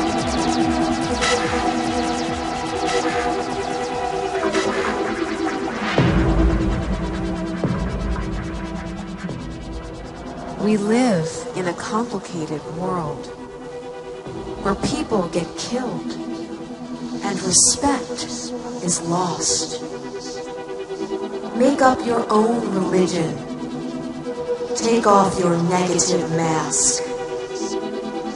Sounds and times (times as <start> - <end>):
Music: 0.0 - 28.3
Speech: 10.6 - 13.4, 14.6 - 16.2, 17.2 - 20.4, 21.6 - 23.4, 24.8 - 27.8.